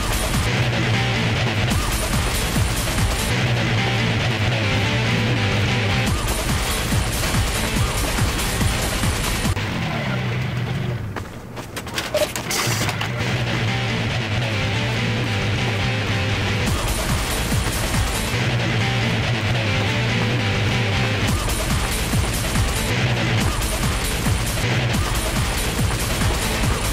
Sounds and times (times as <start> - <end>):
Music: 0.0 - 11.1, 12.4 - 26.9
Sound effect: 11.9 - 13.6.